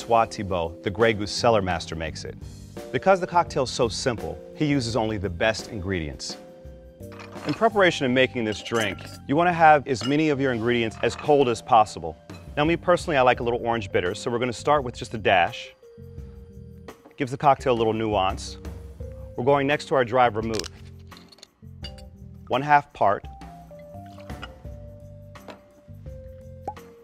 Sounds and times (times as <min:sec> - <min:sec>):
Speech: 0:00.0 - 0:06.4, 0:07.5 - 0:15.7, 0:17.2 - 0:18.6, 0:19.4 - 0:20.7, 0:22.5 - 0:23.3
Music: 0:00.0 - 0:27.0.